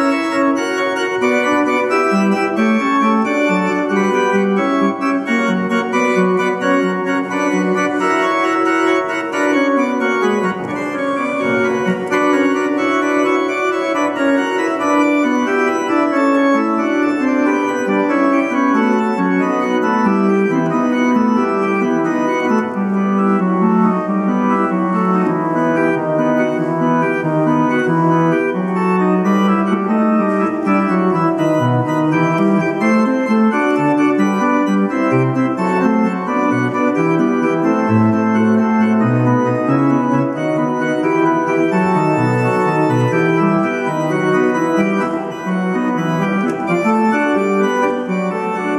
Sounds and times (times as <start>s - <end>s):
Hammond organ: 0.0s - 48.7s.